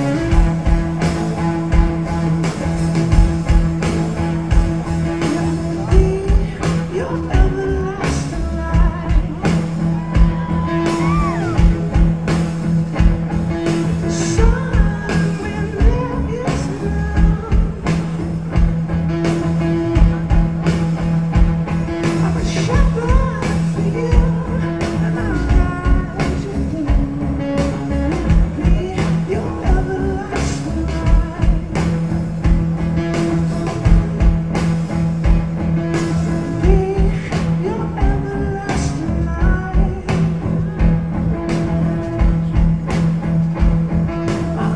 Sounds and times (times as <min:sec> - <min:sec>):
Music: 0:00.0 - 0:44.7.